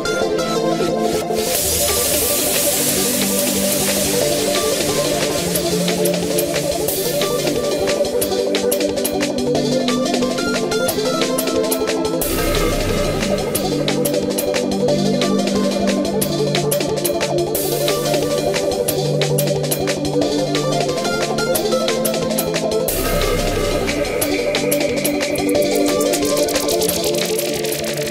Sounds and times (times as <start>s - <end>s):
Music: 0.0s - 28.1s.